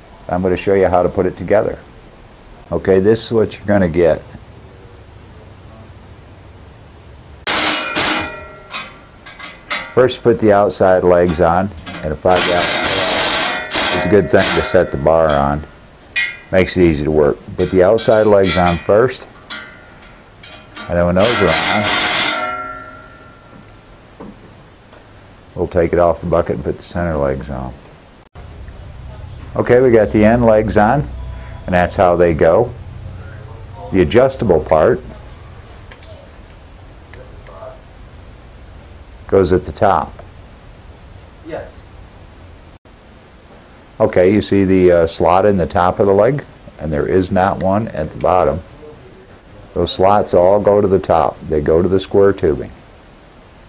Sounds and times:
Speech: 0:00.2 - 0:01.9, 0:02.6 - 0:04.4, 0:10.0 - 0:13.3, 0:13.9 - 0:15.7, 0:16.5 - 0:19.3, 0:20.8 - 0:22.0, 0:25.6 - 0:27.8, 0:29.1 - 0:36.4, 0:37.1 - 0:37.8, 0:39.3 - 0:40.2, 0:41.4 - 0:41.8, 0:44.0 - 0:52.8.

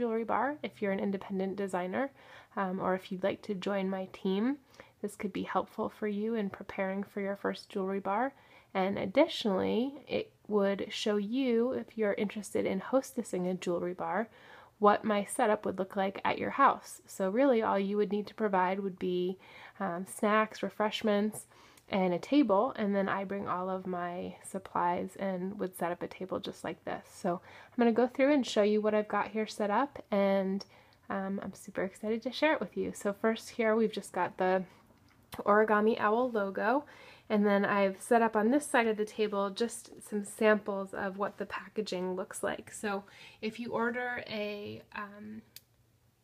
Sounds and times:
Speech: 0:00.0 - 0:34.7, 0:35.4 - 0:45.6.

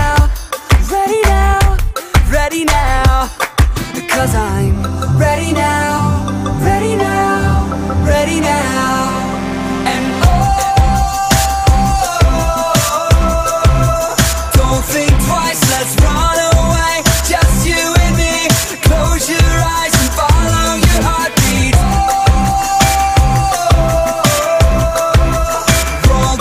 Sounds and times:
Music: 0:00.0 - 0:26.4.

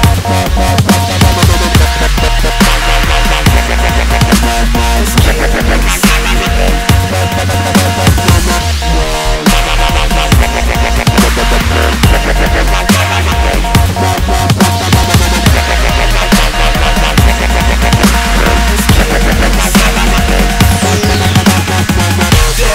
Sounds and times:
Dubstep: 0:00.0 - 0:22.7.

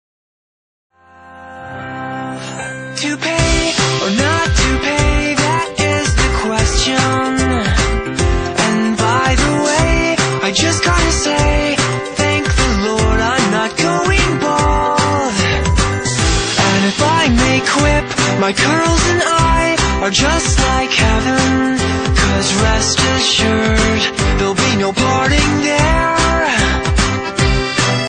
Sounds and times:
Music: 0:00.9 - 0:28.0.

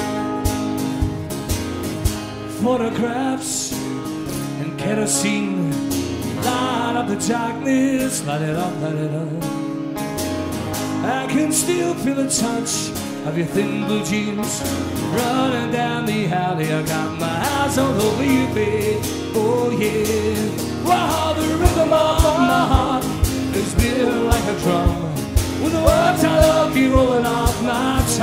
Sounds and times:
Rock and roll: 0:00.0 - 0:28.2
Singing: 0:15.1 - 0:28.2.

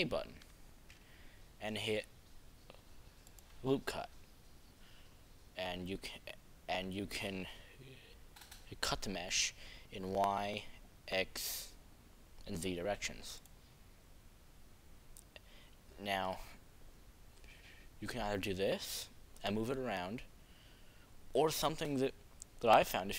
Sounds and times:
Speech: 0:00.0 - 0:00.4, 0:01.6 - 0:02.1, 0:03.6 - 0:04.1, 0:05.6 - 0:08.0, 0:08.7 - 0:11.8, 0:12.4 - 0:13.4, 0:16.0 - 0:16.6, 0:18.0 - 0:20.3, 0:21.4 - 0:23.1.

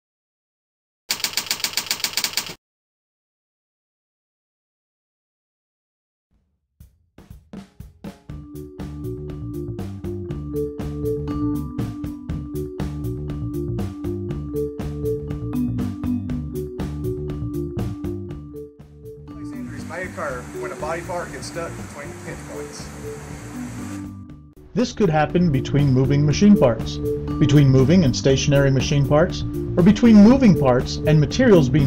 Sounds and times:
Music: 0:06.4 - 0:31.8.

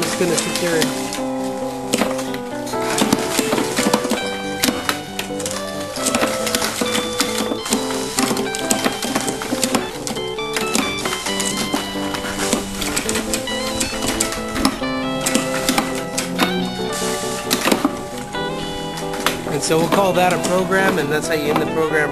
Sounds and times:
Speech: 0:00.0 - 0:01.0, 0:19.5 - 0:22.1
Music: 0:00.0 - 0:22.1.

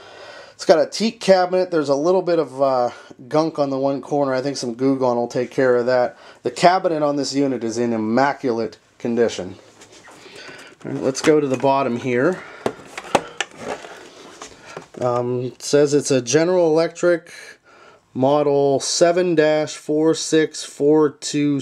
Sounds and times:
Speech: 0:00.6 - 0:09.6, 0:10.8 - 0:12.4, 0:15.0 - 0:17.6, 0:18.2 - 0:21.6.

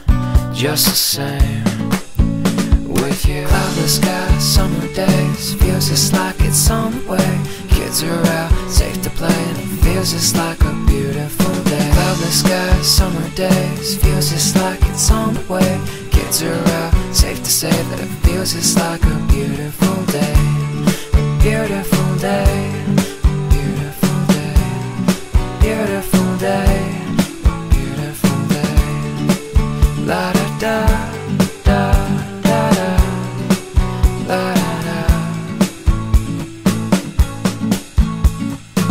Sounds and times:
Music: 0:00.0 - 0:38.9.

